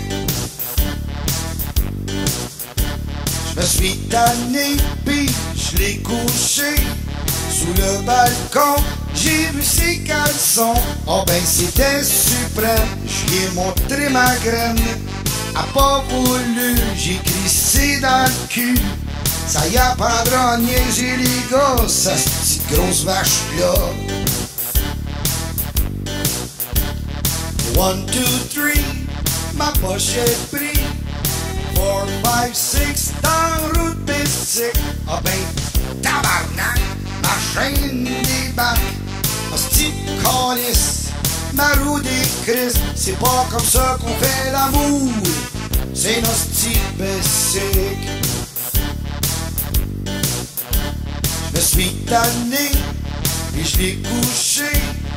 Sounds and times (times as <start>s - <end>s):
Music: 0.0s - 55.1s.